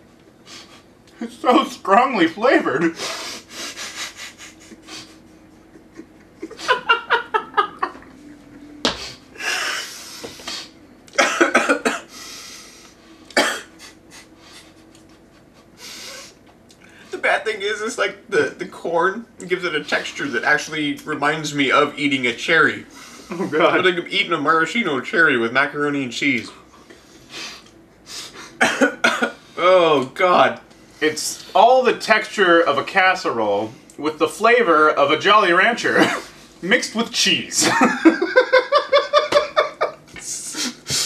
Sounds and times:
Inside, small room: 0.0 - 41.0
Speech: 1.2 - 3.0, 17.1 - 26.6, 29.6 - 37.9.

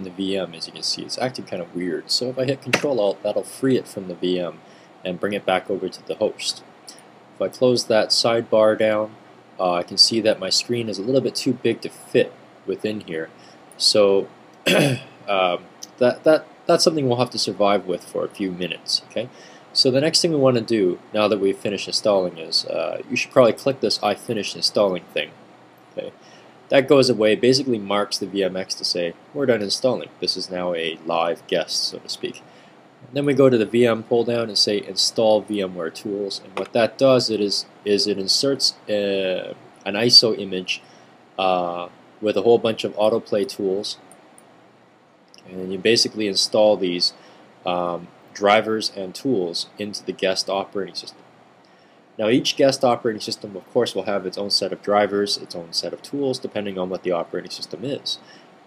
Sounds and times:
Speech: 0.0 - 25.4, 26.0 - 32.4, 33.1 - 40.8, 41.4 - 44.0, 45.4 - 51.2, 52.2 - 58.3.

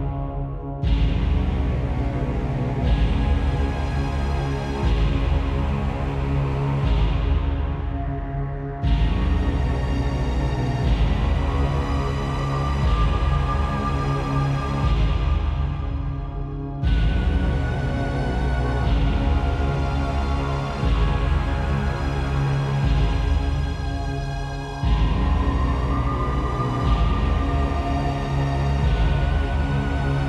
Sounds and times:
Music: 0.0 - 30.2.

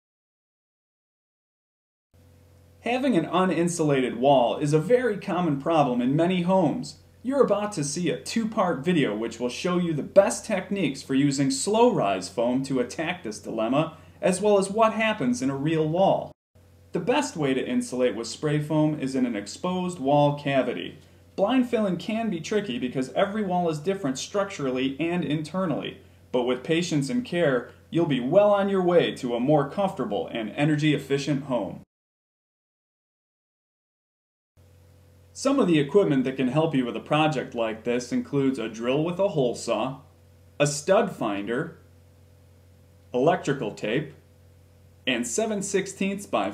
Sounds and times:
Speech: 2.8 - 16.4, 17.0 - 31.9, 35.4 - 41.8, 43.1 - 44.2, 45.1 - 46.5.

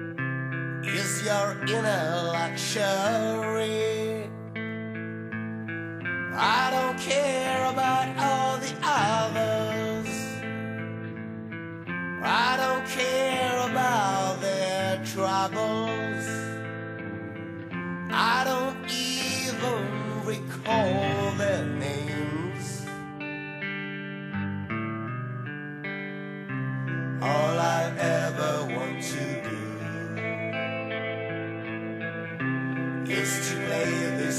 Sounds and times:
Music: 0.0 - 34.3.

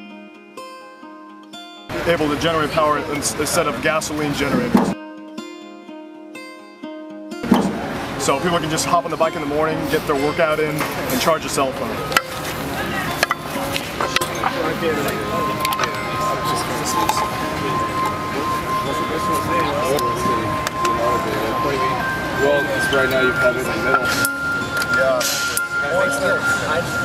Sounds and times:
Music: 0.0 - 27.0
Speech: 1.9 - 5.0, 8.2 - 12.1, 18.4 - 24.2.

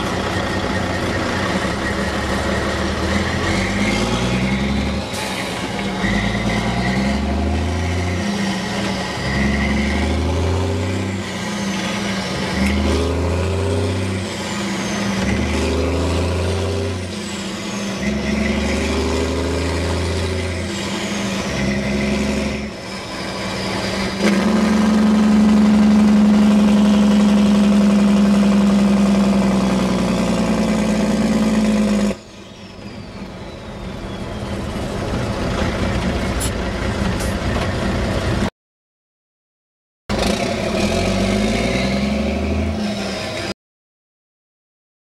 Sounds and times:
Vehicle: 0.0 - 38.5, 40.1 - 43.6.

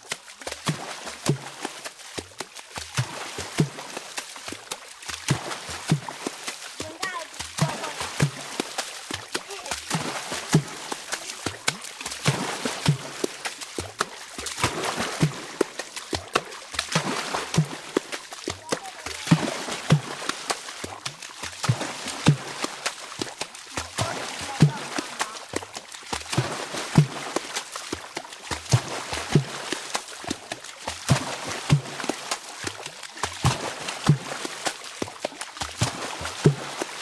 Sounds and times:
Speech: 6.8 - 8.2, 9.4 - 9.9, 18.6 - 19.5, 23.8 - 25.5.

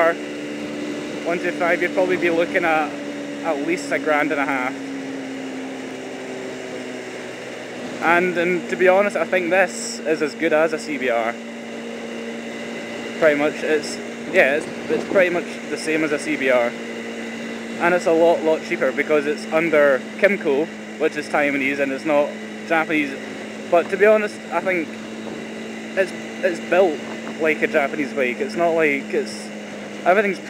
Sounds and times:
Speech: 0.0 - 0.2, 1.2 - 4.8, 8.0 - 11.4, 13.2 - 16.8, 17.8 - 25.0, 26.0 - 30.5
Motorcycle: 0.0 - 30.5.

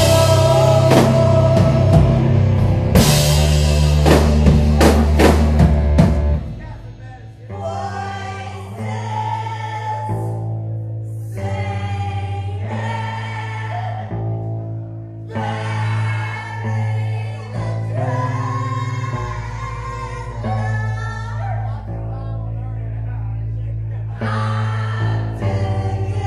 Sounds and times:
Music: 0.0 - 26.2
Speech: 6.5 - 8.9, 20.5 - 24.8.

